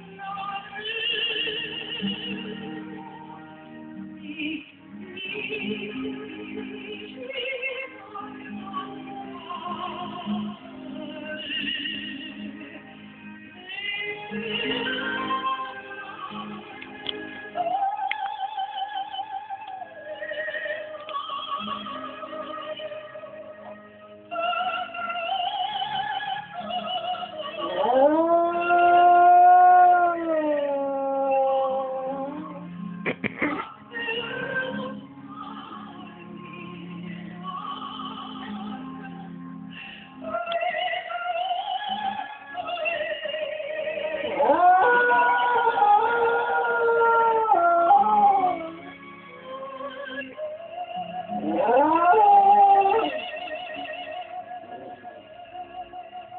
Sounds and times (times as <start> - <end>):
Female singing: 0.0 - 32.7, 33.4 - 39.5, 40.2 - 56.3
Opera: 0.0 - 56.3.